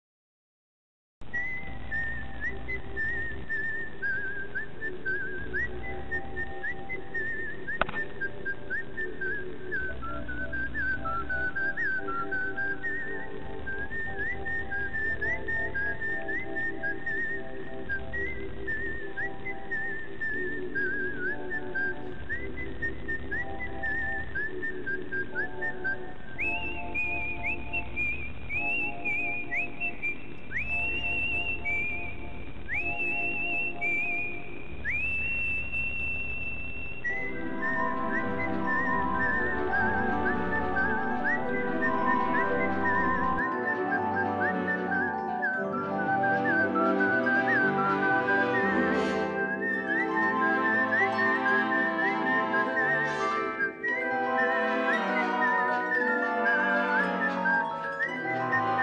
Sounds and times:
Music: 1.2s - 34.8s, 37.1s - 58.8s.

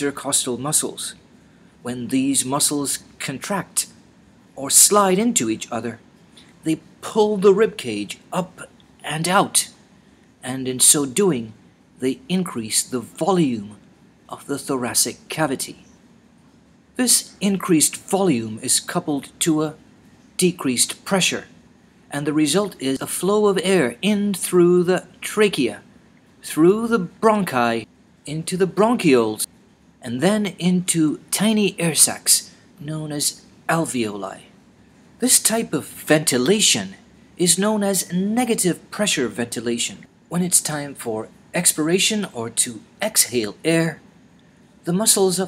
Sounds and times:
Speech: 0.0s - 1.2s, 1.8s - 4.0s, 4.6s - 9.8s, 10.4s - 15.9s, 17.0s - 19.8s, 20.4s - 34.6s, 35.2s - 44.0s, 44.8s - 45.4s.

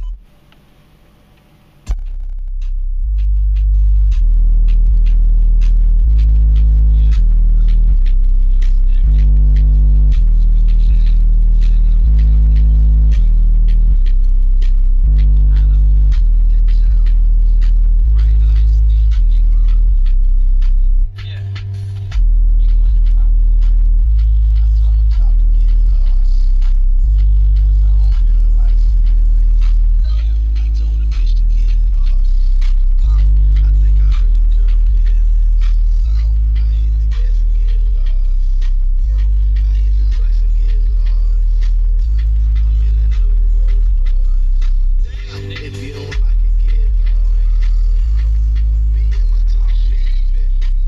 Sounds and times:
Music: 0.0s - 0.6s, 1.7s - 50.8s.

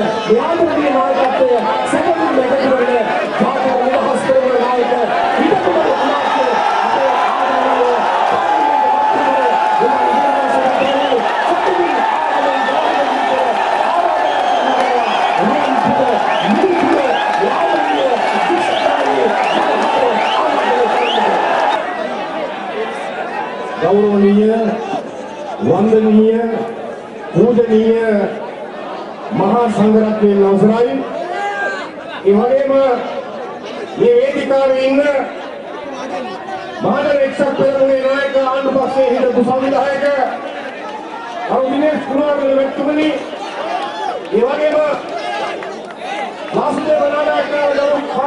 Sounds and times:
Male speech, man speaking: 0.0s - 21.6s, 23.8s - 25.0s, 25.6s - 28.4s, 29.3s - 40.7s, 41.4s - 43.3s, 44.3s - 48.2s.

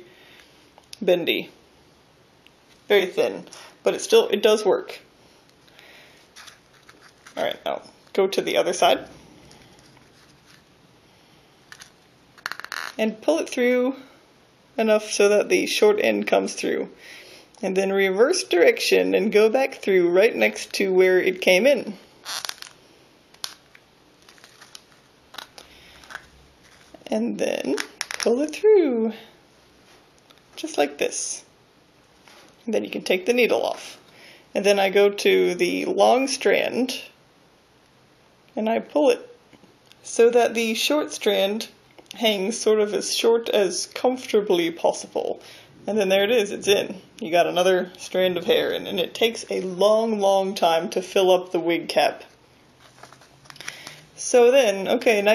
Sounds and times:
Inside, small room: 0.0s - 55.3s
Speech: 2.9s - 5.1s, 7.4s - 9.1s, 14.8s - 16.9s, 17.6s - 22.0s, 27.1s - 29.3s, 30.6s - 31.5s, 32.7s - 34.0s, 34.6s - 37.2s, 38.6s - 39.3s, 40.0s - 52.3s, 54.2s - 55.3s.

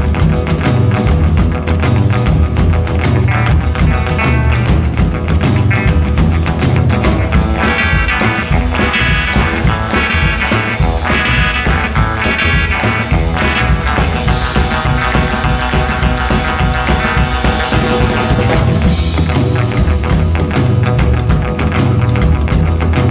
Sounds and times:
Music: 0.0s - 23.1s.

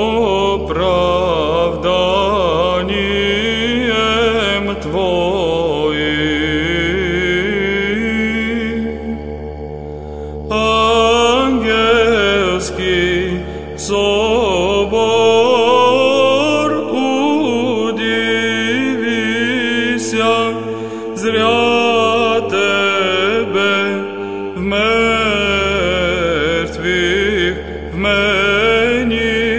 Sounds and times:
Mantra: 0.0s - 9.2s, 10.5s - 29.5s.

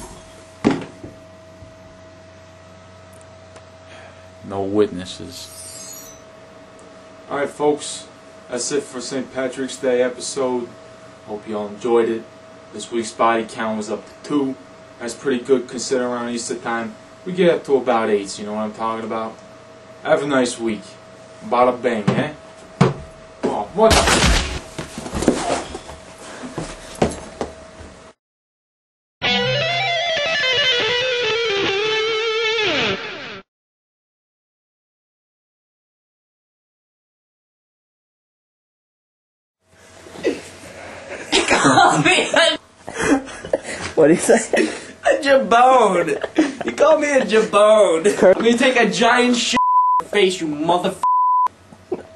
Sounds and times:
Speech: 4.4s - 5.5s, 7.3s - 19.4s, 20.0s - 22.4s, 23.4s - 24.1s, 44.0s - 51.0s.

